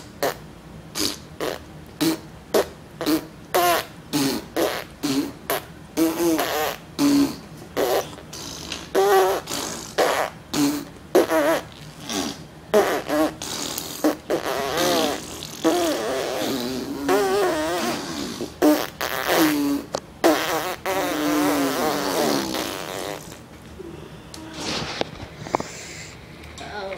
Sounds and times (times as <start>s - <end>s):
Fart: 0.0s - 0.4s, 1.0s - 23.4s.